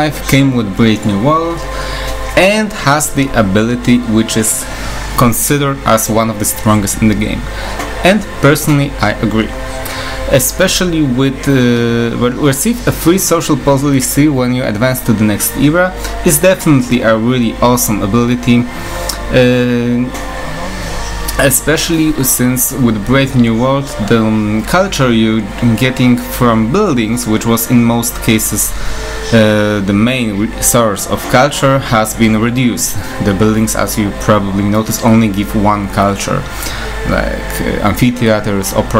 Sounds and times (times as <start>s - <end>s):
Speech: 0.0s - 1.7s, 2.4s - 4.6s, 5.2s - 9.5s, 10.3s - 38.9s
Music: 0.0s - 38.9s.